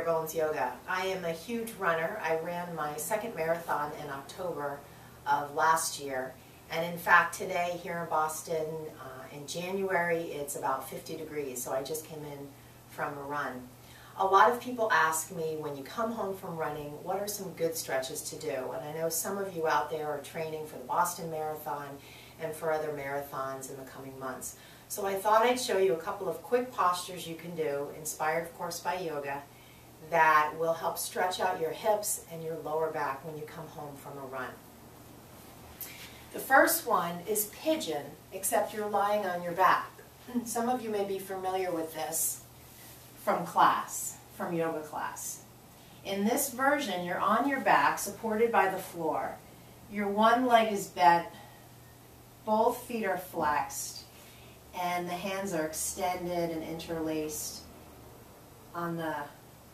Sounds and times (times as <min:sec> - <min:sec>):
Speech: 0:00.0 - 0:34.6, 0:36.4 - 0:42.4, 0:43.2 - 0:45.5, 0:46.1 - 0:51.4, 0:52.5 - 0:54.1, 0:54.8 - 0:57.7, 0:58.7 - 0:59.4.